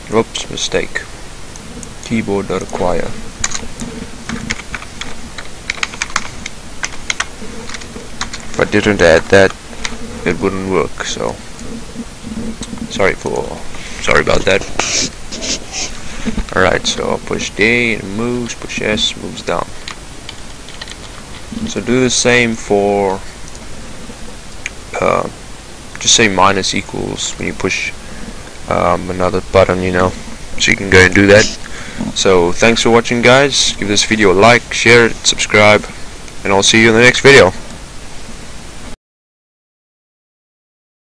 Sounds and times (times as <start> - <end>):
Speech: 0.0 - 1.1, 2.0 - 3.2, 8.6 - 9.6, 10.2 - 11.4, 12.9 - 15.9, 16.5 - 19.7, 21.6 - 23.3, 24.9 - 25.4, 26.0 - 28.0, 28.7 - 37.6
Pink noise: 0.0 - 39.0.